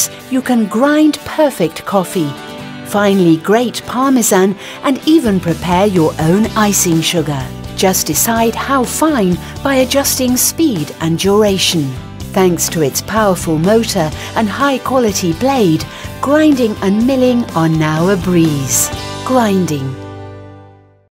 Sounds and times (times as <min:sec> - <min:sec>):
Speech: 0:00.0 - 0:20.0
Music: 0:00.0 - 0:21.1.